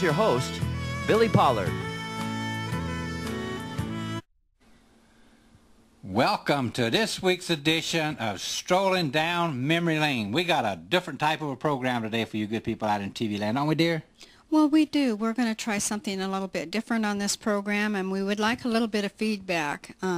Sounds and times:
Speech: 0:00.0 - 0:01.8, 0:06.0 - 0:20.1
Music: 0:00.0 - 0:04.3.

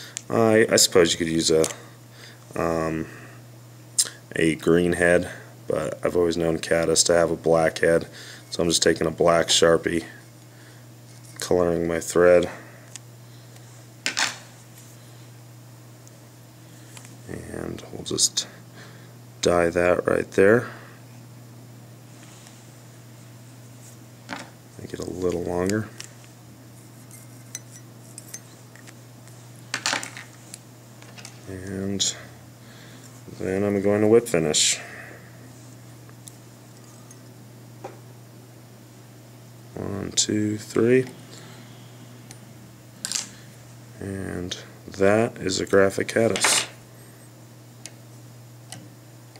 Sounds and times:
Speech: 0:00.3 - 0:01.8, 0:02.6 - 0:03.1, 0:04.3 - 0:10.2, 0:11.4 - 0:12.6, 0:17.3 - 0:18.6, 0:19.4 - 0:20.8, 0:24.8 - 0:26.0, 0:31.4 - 0:32.3, 0:33.3 - 0:34.9, 0:39.7 - 0:41.2, 0:44.0 - 0:46.7.

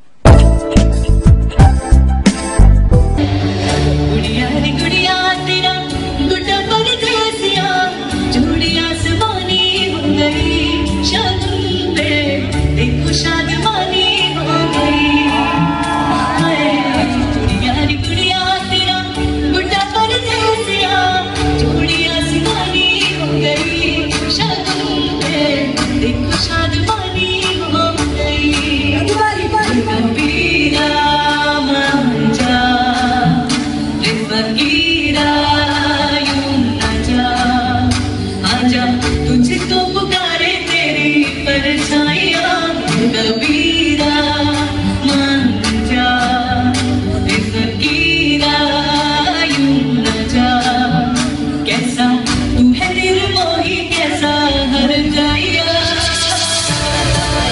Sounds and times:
Music: 0:00.0 - 0:57.5
Female singing: 0:04.1 - 0:57.5.

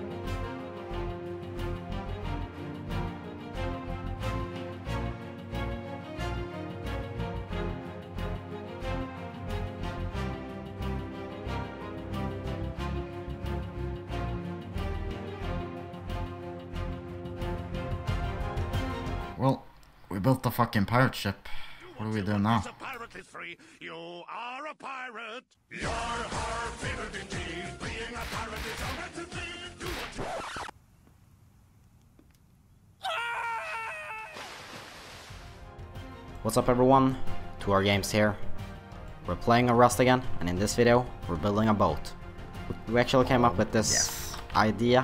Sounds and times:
Music: 0:00.0 - 0:19.4, 0:25.7 - 0:30.4, 0:35.6 - 0:45.0
Speech: 0:19.4 - 0:25.4, 0:36.4 - 0:38.4, 0:39.3 - 0:42.1, 0:42.9 - 0:45.0.

